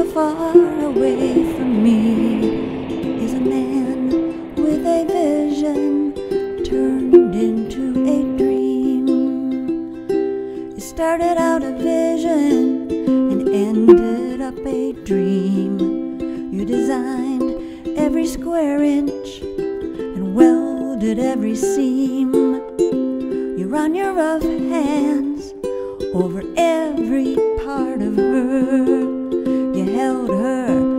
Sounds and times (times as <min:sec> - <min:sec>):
Music: 0:00.0 - 0:30.9.